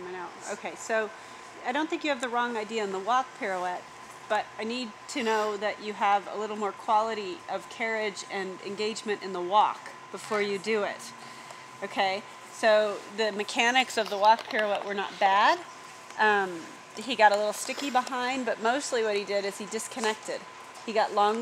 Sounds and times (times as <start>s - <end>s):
Speech: 0.0s - 11.1s, 11.8s - 15.6s, 16.2s - 21.4s.